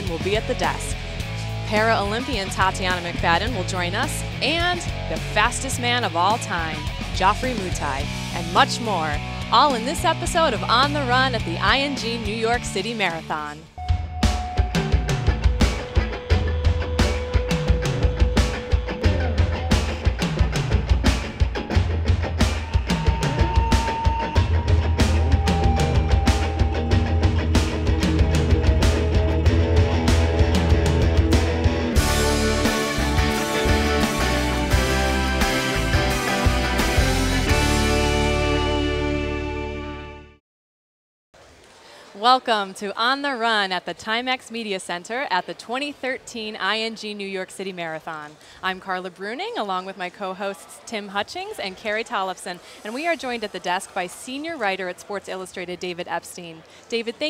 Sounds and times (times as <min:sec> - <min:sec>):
Music: 0:00.0 - 0:40.4.